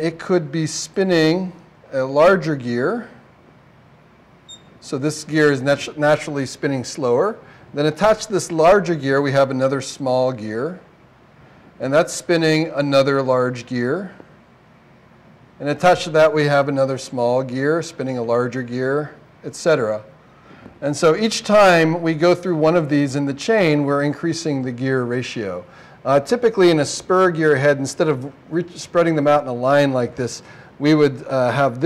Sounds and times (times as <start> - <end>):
Speech: 0.0 - 3.2, 4.8 - 10.9, 11.8 - 14.3, 15.6 - 20.1, 20.8 - 31.8.